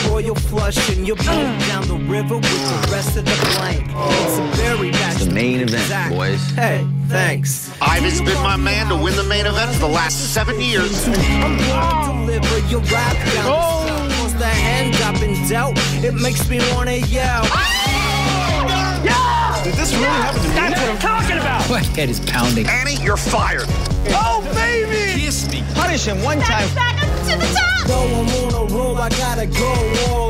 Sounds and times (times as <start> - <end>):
Speech: 3.6 - 12.3, 18.7 - 27.9.